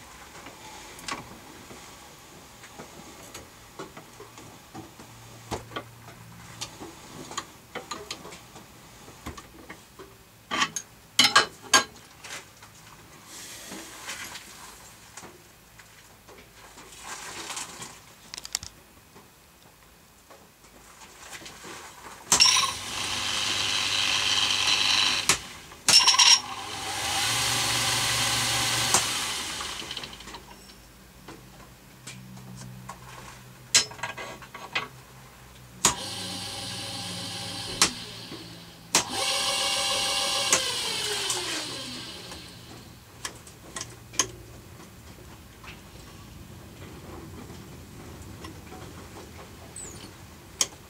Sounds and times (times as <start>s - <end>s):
Drill: 22.4s - 30.4s, 35.9s - 42.9s.